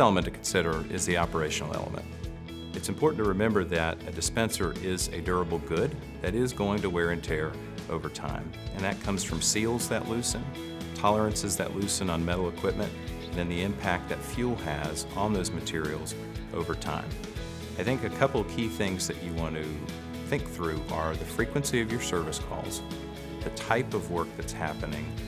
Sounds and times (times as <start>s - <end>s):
Speech: 0.0s - 2.1s, 2.8s - 17.2s, 17.8s - 25.2s
Music: 0.0s - 25.2s.